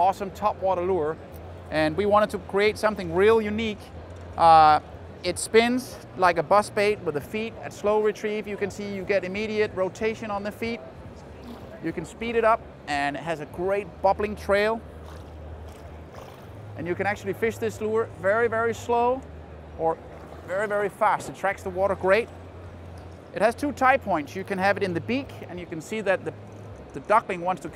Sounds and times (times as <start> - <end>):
Speech: 4.4 - 10.8, 16.8 - 19.2, 19.8 - 22.3.